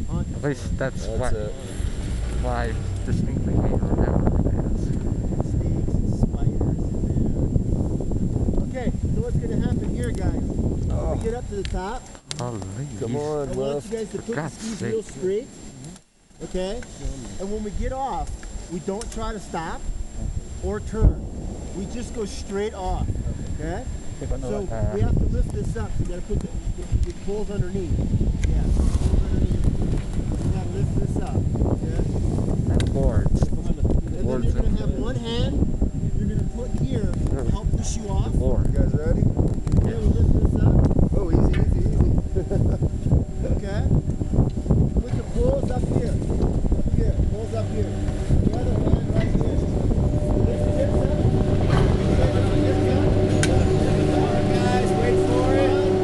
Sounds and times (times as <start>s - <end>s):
Outside, rural or natural: 0.0s - 56.0s
Speech: 0.1s - 1.7s, 2.4s - 4.9s, 8.6s - 15.5s, 16.4s - 19.8s, 21.8s - 27.9s, 32.7s - 39.2s, 45.0s - 46.2s, 46.9s - 49.8s, 50.4s - 56.0s.